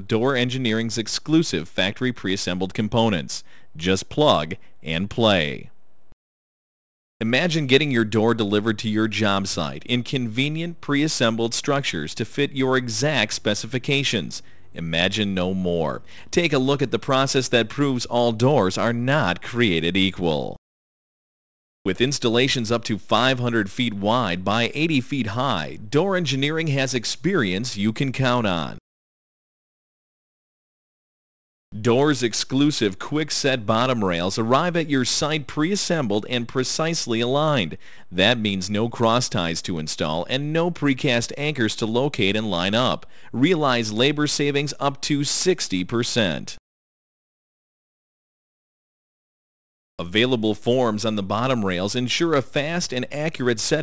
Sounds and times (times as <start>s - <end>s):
Speech: 0.0s - 5.8s, 7.2s - 20.6s, 21.9s - 28.8s, 31.8s - 46.6s, 50.0s - 53.8s.